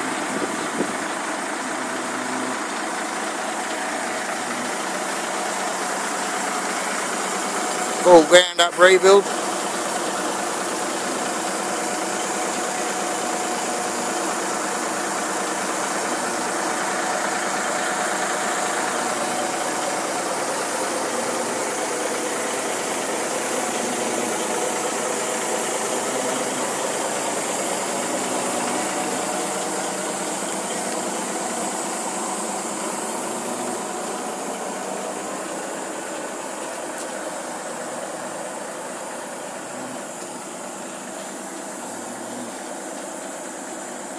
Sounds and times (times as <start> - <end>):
Truck: 0.0 - 44.1.